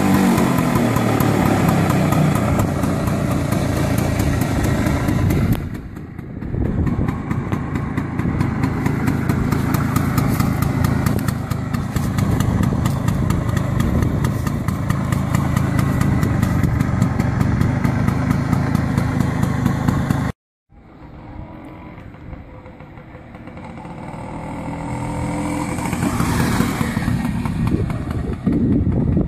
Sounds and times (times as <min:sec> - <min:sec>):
Outside, urban or manmade: 0:00.0 - 0:29.2
Vehicle: 0:00.0 - 0:29.2.